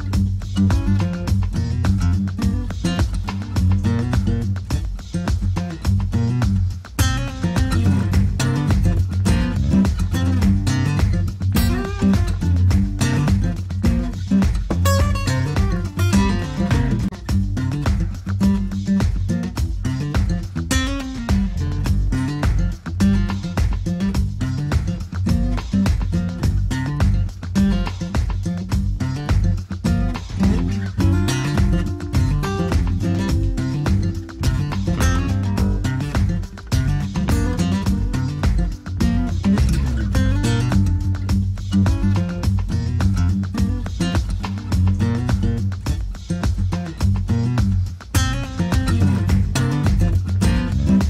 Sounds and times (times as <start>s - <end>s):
Music: 0.0s - 51.0s.